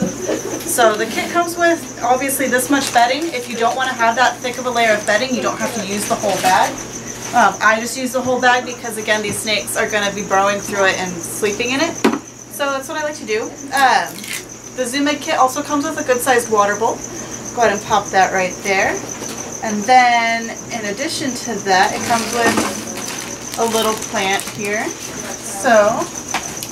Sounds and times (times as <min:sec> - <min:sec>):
Speech: 0:00.7 - 0:06.8, 0:19.7 - 0:23.0.